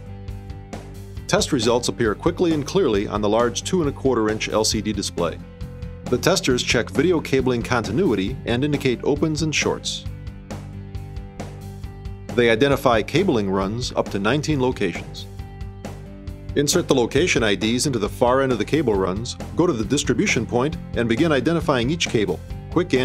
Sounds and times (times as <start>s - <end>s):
Music: 0.0s - 23.0s
Speech: 1.3s - 5.4s, 6.1s - 10.1s, 12.3s - 15.3s, 16.6s - 23.0s.